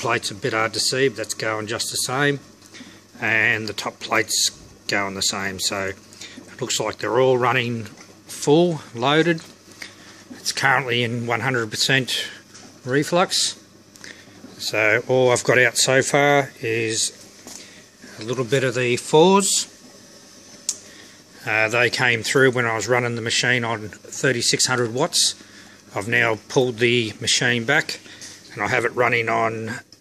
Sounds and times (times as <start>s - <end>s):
Speech: 0.0s - 2.5s, 3.2s - 9.5s, 10.4s - 13.6s, 14.6s - 17.2s, 18.1s - 19.7s, 21.4s - 29.9s.